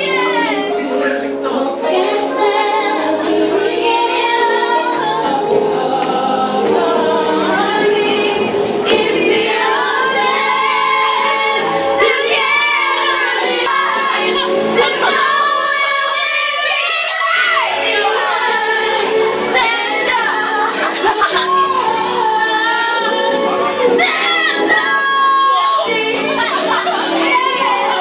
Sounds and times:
Choir: 0.0 - 28.0
Female singing: 0.0 - 28.0.

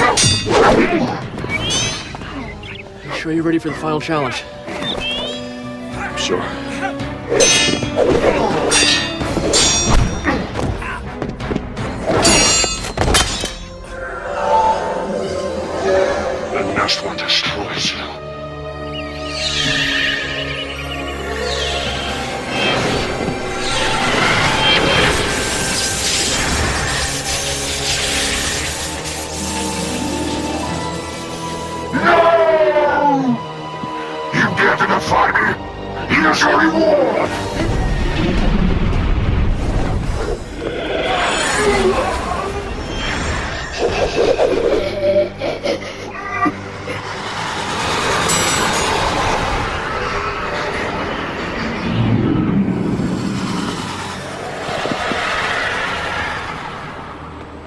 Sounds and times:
Music: 0.0 - 57.6.

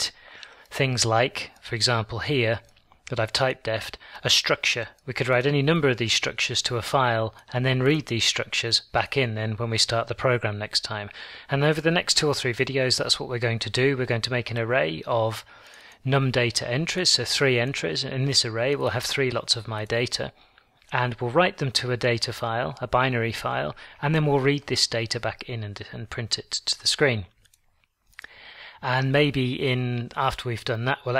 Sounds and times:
Speech: 0.0 - 27.4, 28.8 - 31.1.

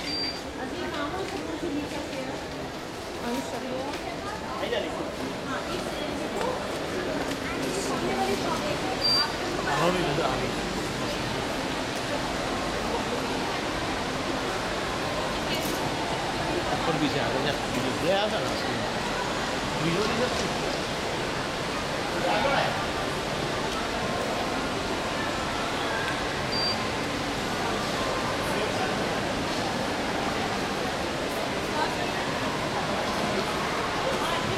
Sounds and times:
Speech: 0.0 - 21.2, 27.3 - 34.5.

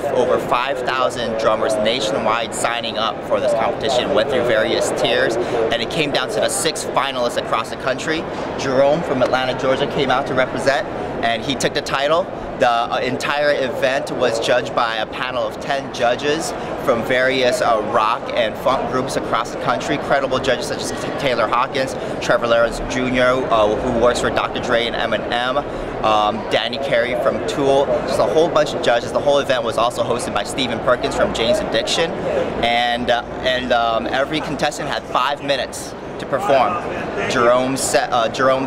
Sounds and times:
Speech: 0.0 - 38.6.

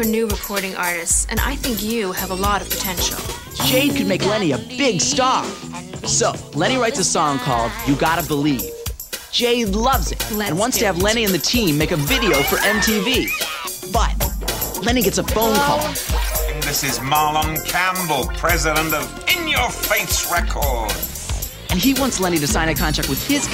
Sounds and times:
Music: 0.0 - 23.5.

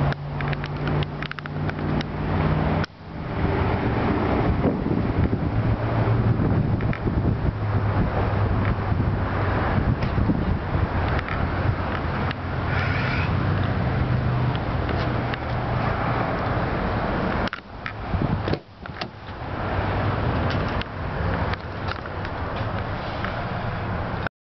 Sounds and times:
Truck: 0.0 - 24.3.

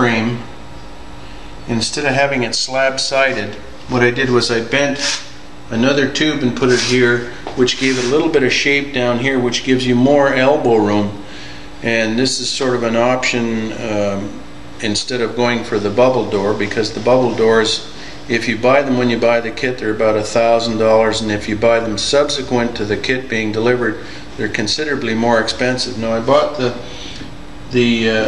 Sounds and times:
Speech: 0.0 - 0.5, 1.7 - 11.2, 11.8 - 26.9, 27.7 - 28.2.

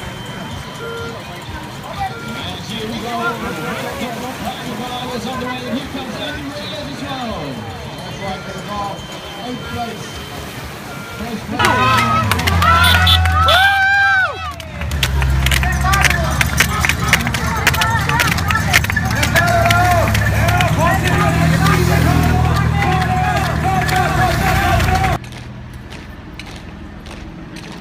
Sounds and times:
Crowd: 0.0 - 27.8
Outside, urban or manmade: 0.0 - 27.8
Speech: 1.0 - 10.4.

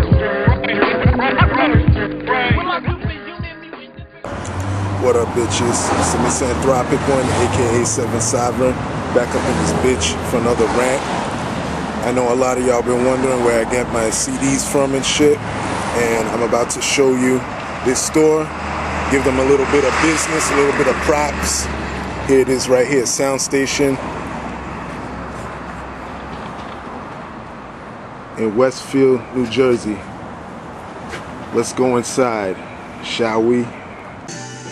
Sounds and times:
Speech: 5.0 - 11.0, 12.0 - 15.4, 16.0 - 18.5, 19.1 - 21.7, 22.3 - 24.0, 28.4 - 30.1, 31.5 - 33.7.

